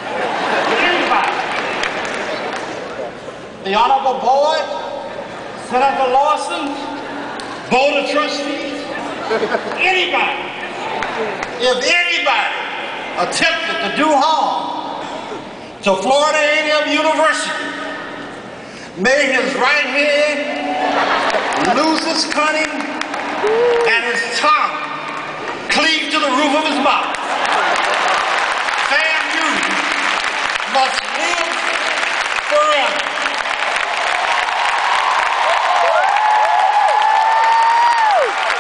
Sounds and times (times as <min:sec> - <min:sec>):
Speech: 0:03.6 - 0:04.9, 0:05.7 - 0:07.0, 0:07.7 - 0:09.0, 0:11.6 - 0:14.8, 0:15.8 - 0:17.8, 0:19.0 - 0:20.5, 0:21.6 - 0:22.9, 0:25.7 - 0:27.1, 0:28.9 - 0:29.9, 0:30.7 - 0:31.8, 0:32.5 - 0:33.2.